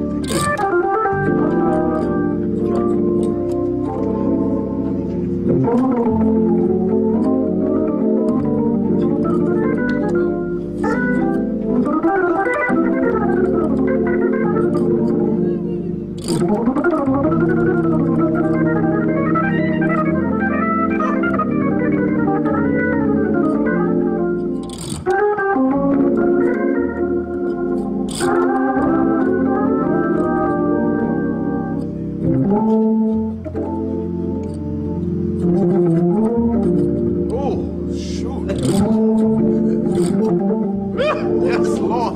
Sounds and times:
Hammond organ: 0:00.0 - 0:42.1.

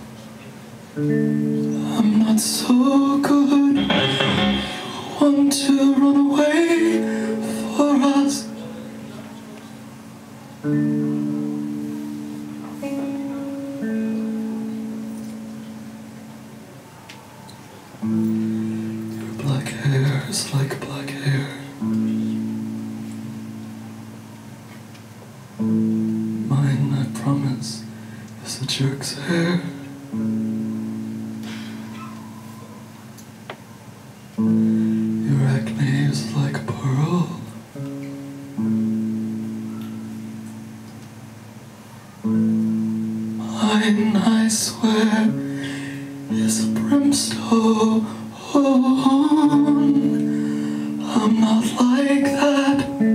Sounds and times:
Music: 0:00.0 - 0:53.1.

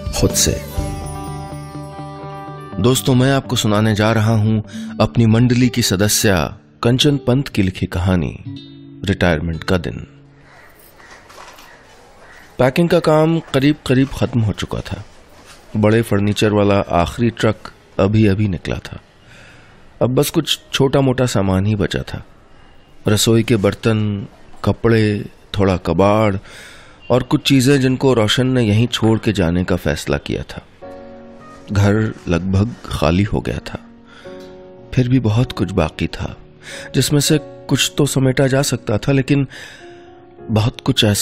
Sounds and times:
Speech: 0:00.0 - 0:00.8, 0:02.8 - 0:10.1, 0:12.6 - 0:15.1, 0:15.7 - 0:19.0, 0:20.0 - 0:22.3, 0:23.1 - 0:26.4, 0:27.1 - 0:30.6, 0:31.7 - 0:33.8, 0:35.0 - 0:36.4, 0:37.0 - 0:39.5, 0:40.5 - 0:41.2.

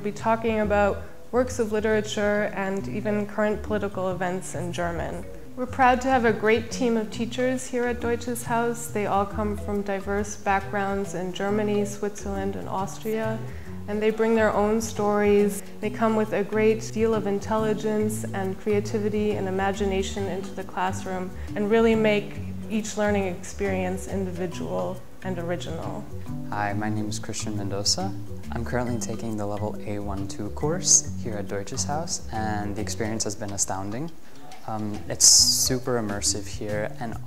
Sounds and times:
Female speech, woman speaking: 0:00.0 - 0:26.9.

